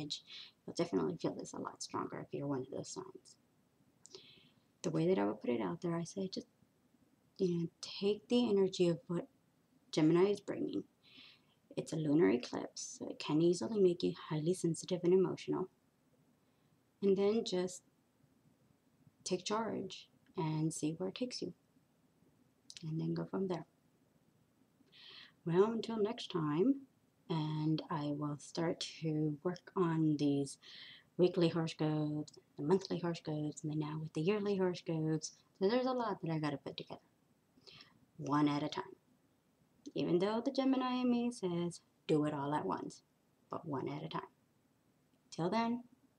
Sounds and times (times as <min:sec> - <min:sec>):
Speech: 0:00.0 - 0:03.4, 0:04.8 - 0:06.5, 0:07.4 - 0:09.3, 0:09.9 - 0:10.9, 0:11.7 - 0:15.7, 0:17.0 - 0:17.8, 0:19.3 - 0:21.6, 0:22.7 - 0:23.7, 0:25.4 - 0:37.0, 0:38.2 - 0:39.0, 0:39.9 - 0:44.4, 0:45.3 - 0:45.9
Inside, small room: 0:00.0 - 0:46.1.